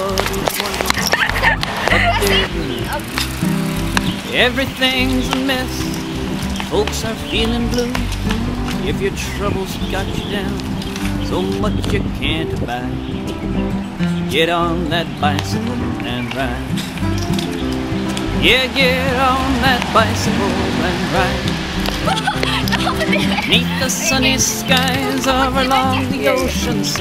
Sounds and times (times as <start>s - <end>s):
Bicycle: 0.0s - 14.2s, 15.0s - 27.0s
Music: 0.0s - 27.0s
Speech: 1.9s - 3.1s, 22.1s - 26.8s.